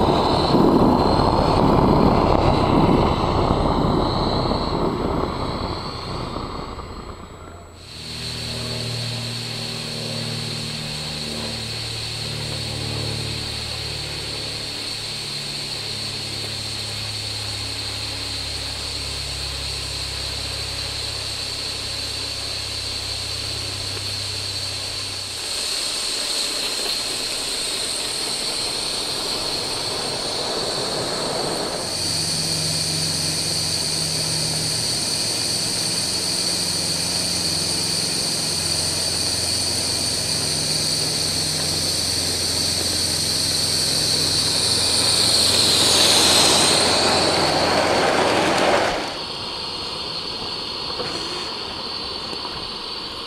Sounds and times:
Hiss: 0:00.0 - 0:53.2.

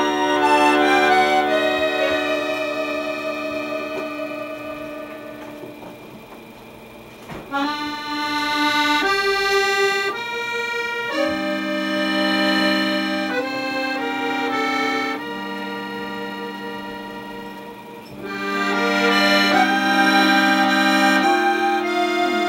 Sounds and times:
Accordion: 0:00.0 - 0:22.4.

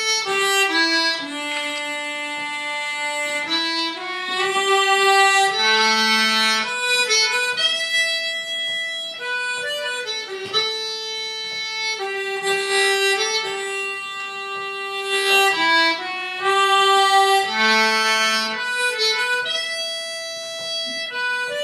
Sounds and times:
Harmonica: 0:00.0 - 0:21.6
Wind instrument, woodwind instrument: 0:00.0 - 0:21.6.

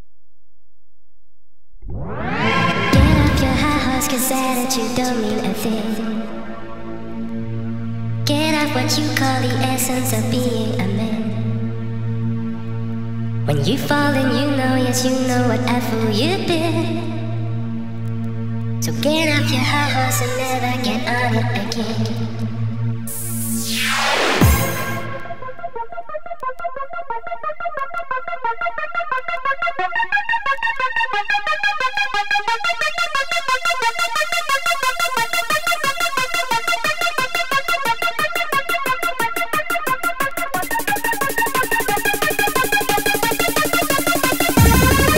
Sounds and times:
Techno: 0:01.9 - 0:12.5, 0:18.9 - 0:45.1.

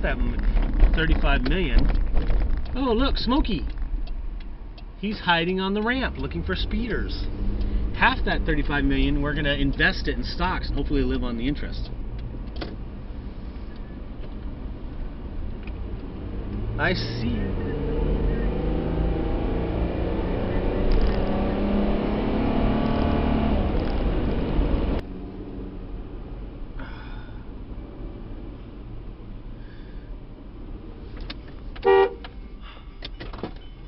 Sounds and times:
Car: 0:00.0 - 0:33.8.

